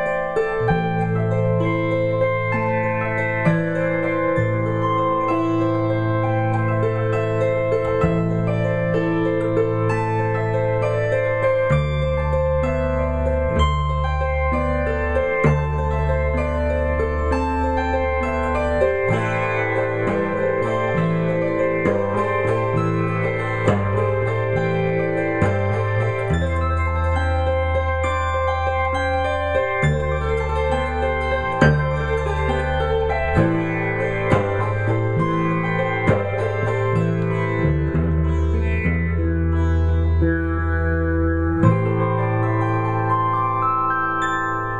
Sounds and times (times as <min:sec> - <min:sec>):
Electric guitar: 0:00.0 - 0:44.8
Strum: 0:00.0 - 0:44.8.